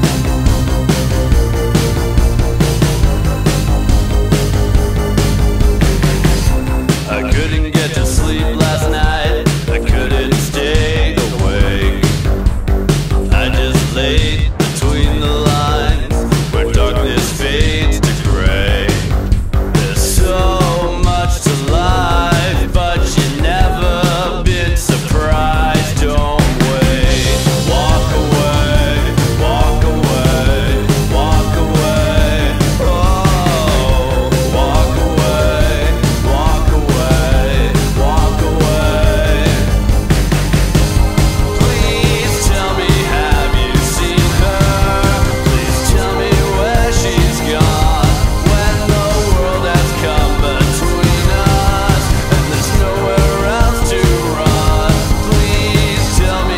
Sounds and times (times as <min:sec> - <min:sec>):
Music: 0:00.0 - 0:56.5.